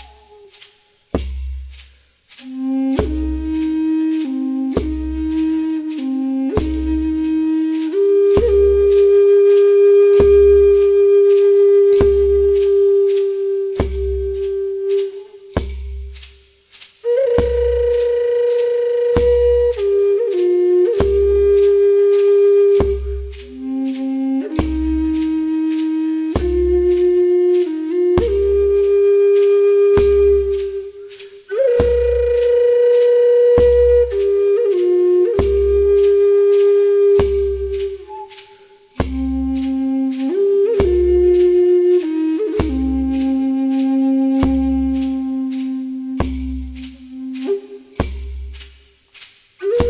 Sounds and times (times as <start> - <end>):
Music: 0.0 - 49.9.